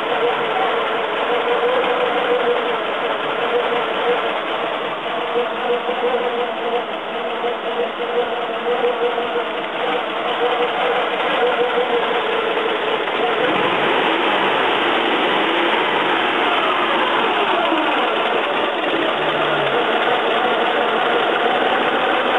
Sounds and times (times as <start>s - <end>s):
Heavy engine (low frequency): 0.0s - 22.3s
Vehicle: 0.0s - 22.3s.